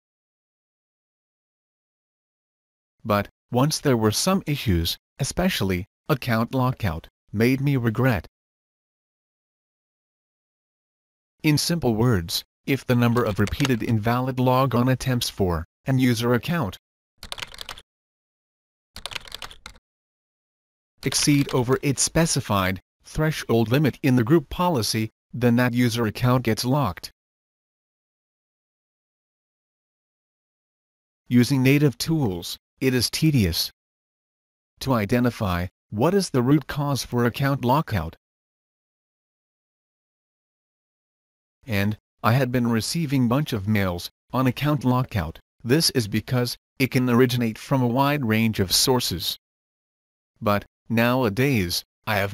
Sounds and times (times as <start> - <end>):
Speech: 3.1 - 8.3, 11.4 - 16.8, 21.0 - 27.1, 31.3 - 33.8, 34.8 - 38.2, 41.7 - 49.4, 50.4 - 52.3.